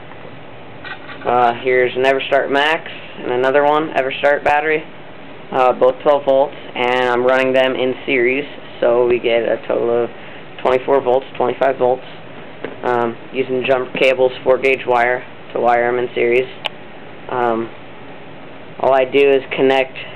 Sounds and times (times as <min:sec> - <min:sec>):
Speech: 0:01.2 - 0:04.9, 0:05.5 - 0:12.1, 0:12.8 - 0:16.7, 0:17.3 - 0:17.8, 0:18.8 - 0:20.1.